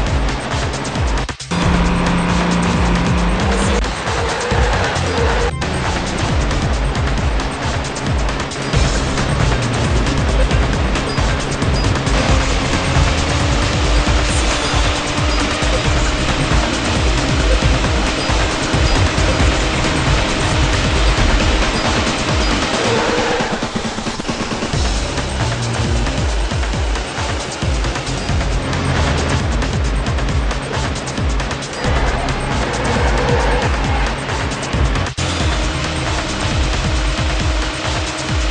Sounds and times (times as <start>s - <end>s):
Music: 0.0s - 38.5s.